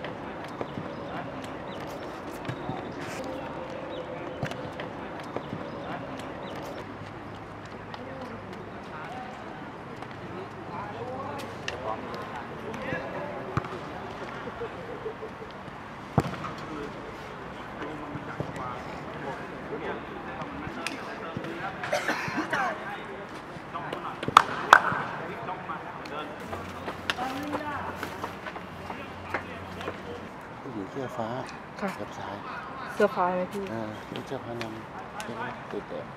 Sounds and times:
Outside, urban or manmade: 0.0s - 36.1s
Male speech, man speaking: 8.0s - 14.9s, 16.6s - 27.9s, 28.9s - 36.1s.

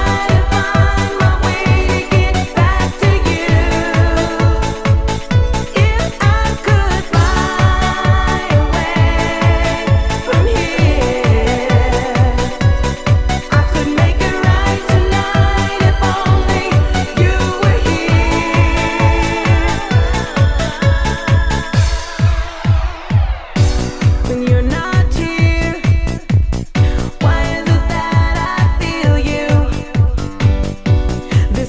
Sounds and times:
Music: 0.0s - 31.6s.

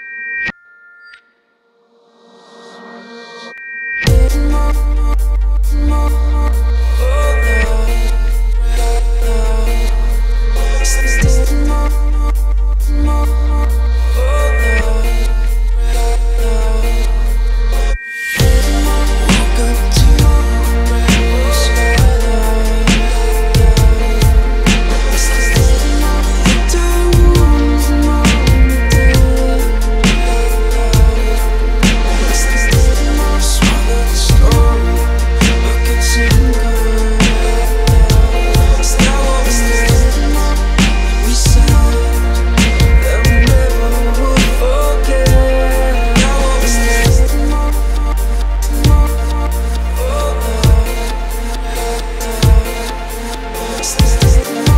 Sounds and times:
Dubstep: 2.2s - 54.7s.

